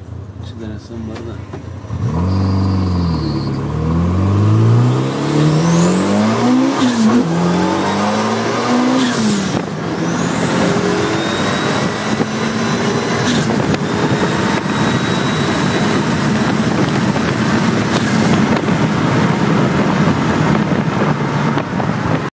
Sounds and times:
Car: 0.0 - 22.3.

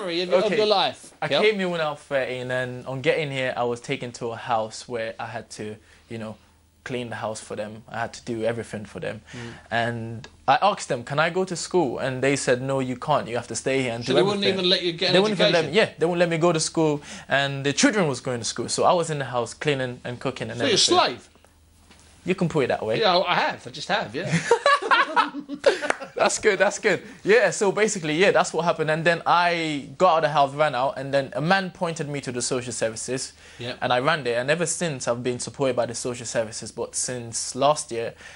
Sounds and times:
Speech: 0.0 - 21.3, 22.2 - 24.4, 26.2 - 38.2.

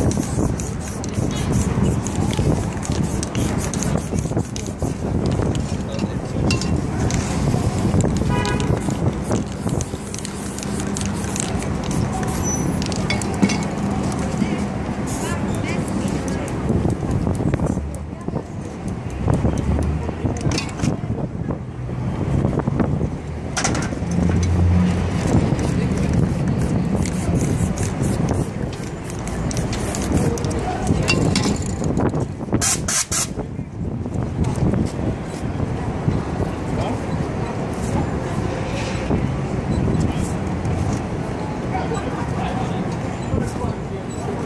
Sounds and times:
Spray: 0.0 - 5.0, 8.7 - 13.0, 15.0 - 15.4, 25.5 - 30.6, 32.6 - 33.4.

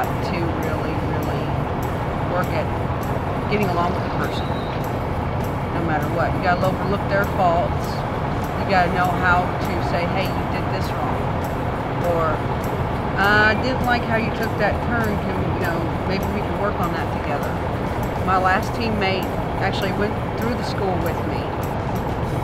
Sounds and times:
Speech: 0.0 - 1.6, 2.3 - 2.7, 3.5 - 4.6, 5.8 - 8.0, 8.6 - 11.2, 12.0 - 12.4, 13.2 - 17.6, 18.2 - 21.7
Music: 0.0 - 22.4.

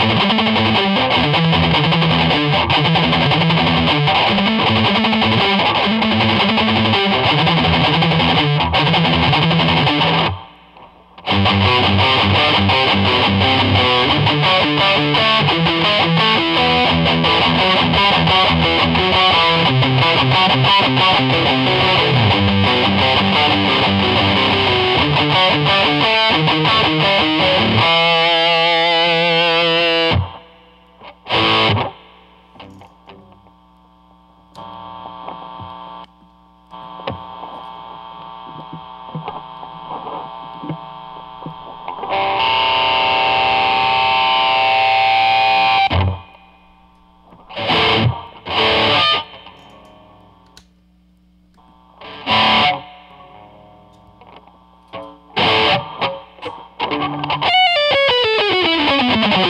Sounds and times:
Distortion: 0.0 - 59.5
Effects unit: 0.0 - 59.5
Electric guitar: 0.0 - 59.5.

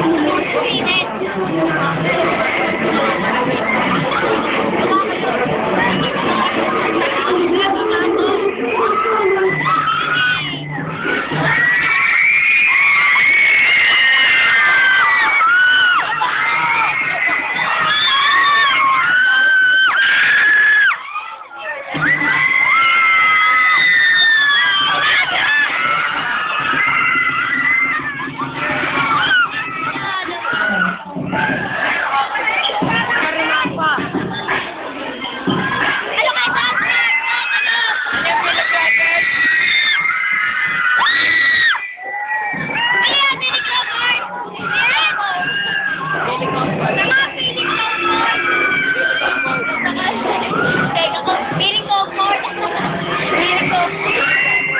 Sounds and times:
Crowd: 0.0 - 54.7.

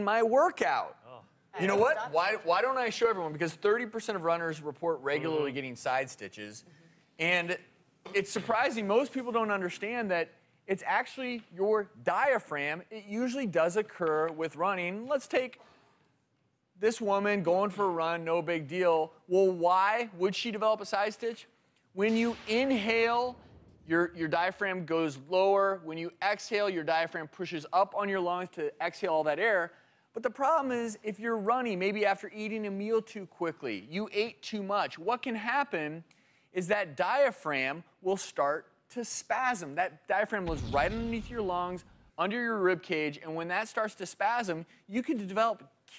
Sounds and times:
Speech: 0.0 - 15.6, 16.8 - 36.0, 36.6 - 45.9.

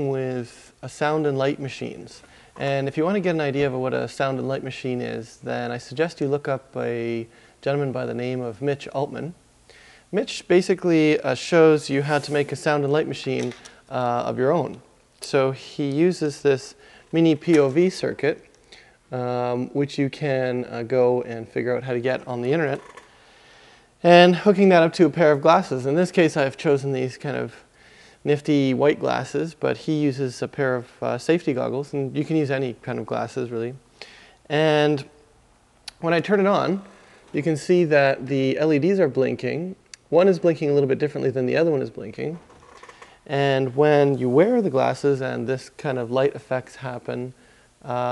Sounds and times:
Speech: 0.0 - 9.4, 10.1 - 18.5, 19.1 - 22.9, 24.0 - 33.9, 34.5 - 35.2, 35.9 - 42.5, 43.3 - 48.1.

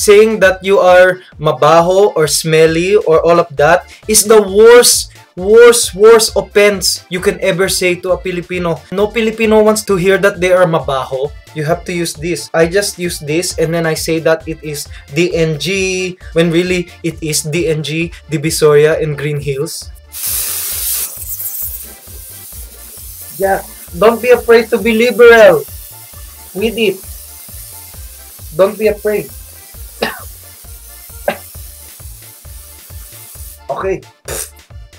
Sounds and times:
Male speech, man speaking: 0.0 - 19.9, 23.3 - 25.7, 26.6 - 27.1, 28.5 - 29.3, 33.7 - 34.1
Music: 0.0 - 34.9.

